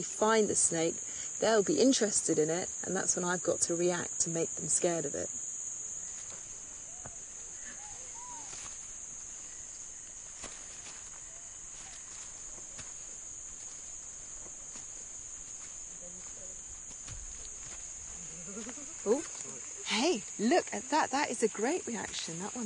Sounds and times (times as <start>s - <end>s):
Animal: 6.8s - 8.6s, 18.1s - 19.8s.